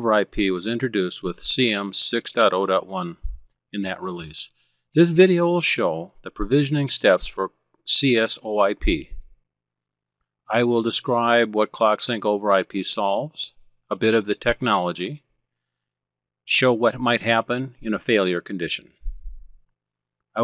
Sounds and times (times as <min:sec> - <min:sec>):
Speech: 0:00.0 - 0:09.2, 0:10.5 - 0:15.3, 0:16.5 - 0:19.0.